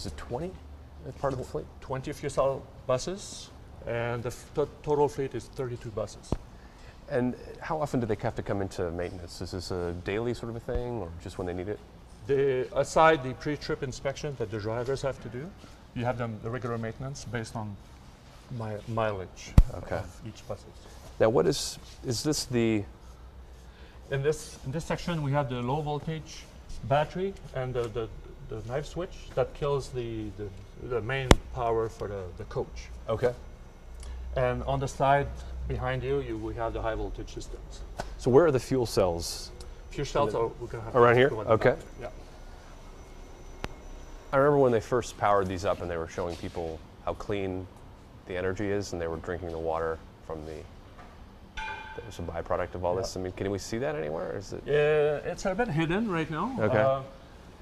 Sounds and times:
Speech: 0.0s - 6.4s, 7.1s - 17.8s, 18.5s - 22.9s, 24.1s - 33.4s, 34.4s - 42.2s, 44.4s - 47.7s, 48.3s - 50.7s, 52.0s - 57.2s.

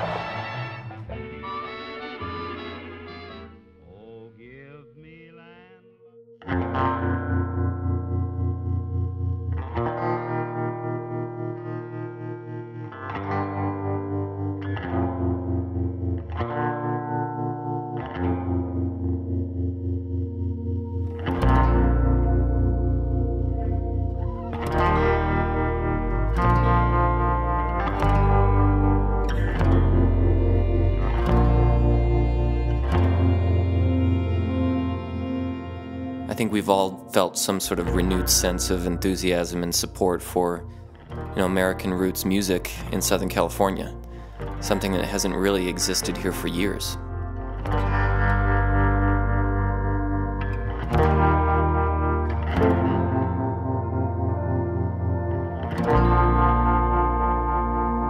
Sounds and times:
Country: 0.0s - 5.6s, 20.9s - 58.0s.

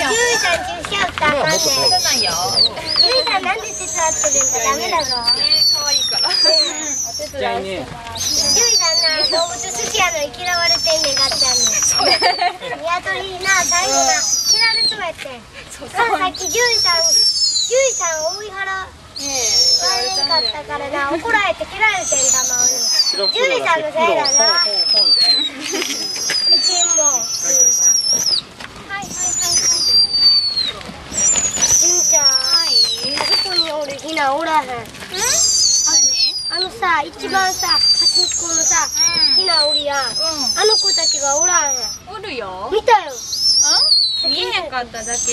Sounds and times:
Bird: 0.0s - 12.7s, 13.4s - 15.1s, 19.2s - 20.6s, 21.8s - 34.3s, 35.1s - 42.1s, 43.0s - 45.3s.

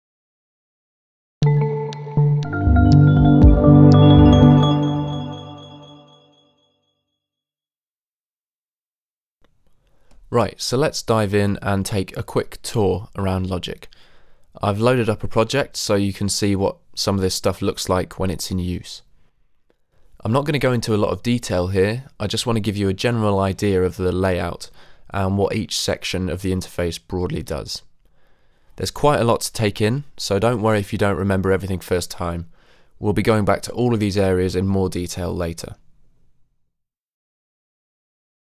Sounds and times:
Music: 1.4s - 6.6s.

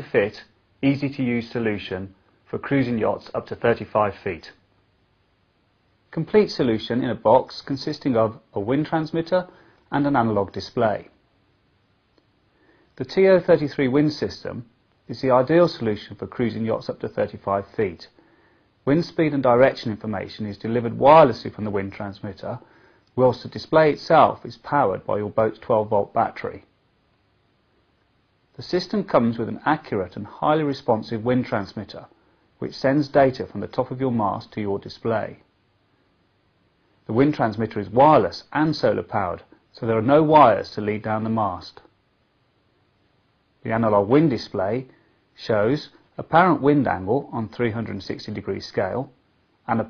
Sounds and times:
Speech: 0.0s - 4.7s, 6.1s - 11.2s, 13.0s - 18.2s, 18.8s - 26.8s, 28.6s - 35.5s, 37.0s - 42.0s, 43.6s - 49.8s.

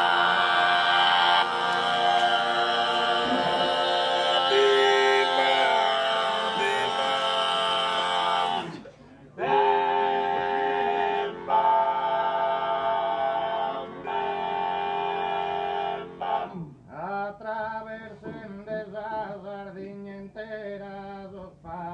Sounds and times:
Male singing: 2.0s - 8.6s, 16.9s - 21.9s.

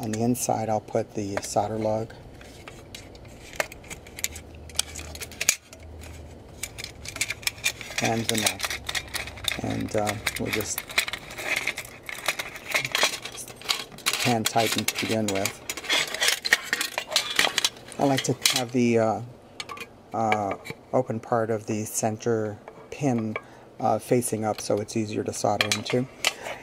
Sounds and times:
Speech: 0.0s - 2.2s, 8.0s - 8.6s, 9.6s - 10.8s, 14.2s - 15.6s, 18.0s - 19.3s, 20.2s - 26.1s.

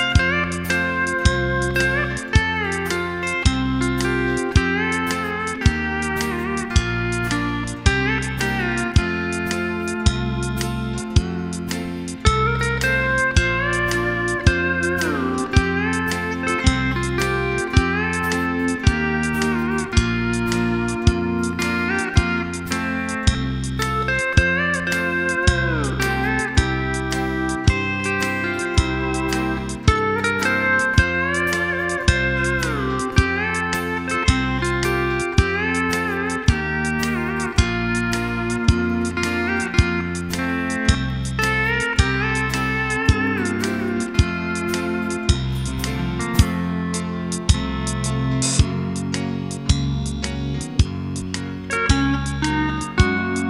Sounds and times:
Strum: 0.0s - 53.5s.

